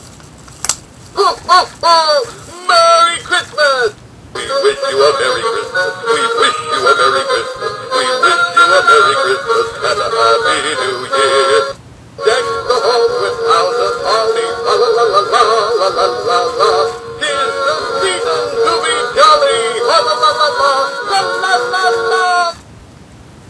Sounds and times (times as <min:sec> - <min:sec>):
Male singing: 0:02.0 - 0:22.6
Synthetic singing: 0:02.0 - 0:22.6
Choir: 0:04.4 - 0:22.6.